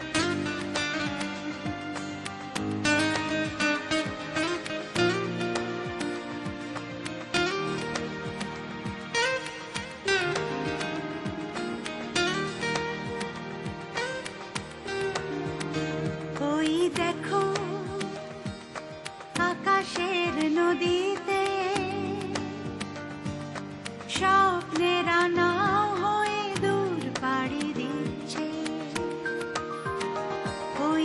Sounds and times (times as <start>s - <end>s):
Happy music: 0.0s - 31.0s.